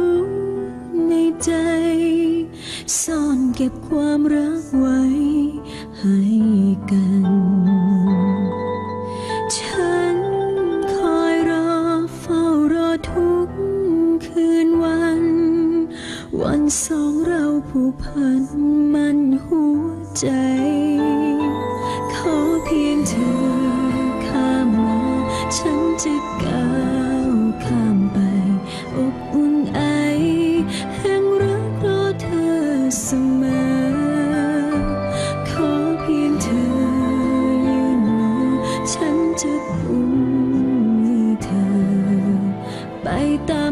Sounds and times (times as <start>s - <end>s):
Music: 0.0s - 43.7s.